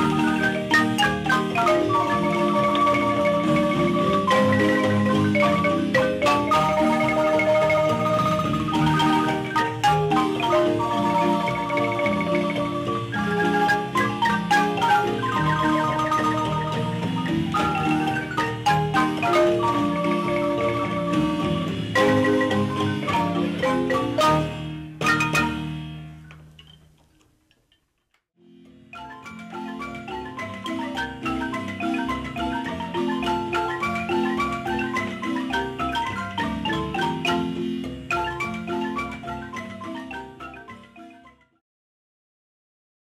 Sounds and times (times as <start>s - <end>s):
Marimba, xylophone: 0.0s - 26.9s, 28.4s - 41.6s.